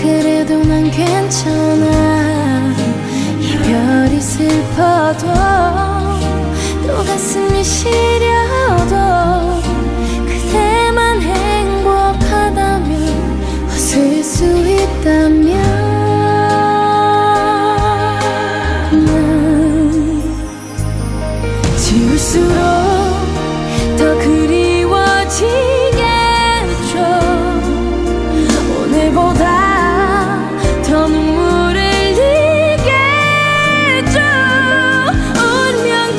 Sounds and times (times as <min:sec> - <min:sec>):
Music: 0:00.0 - 0:36.1.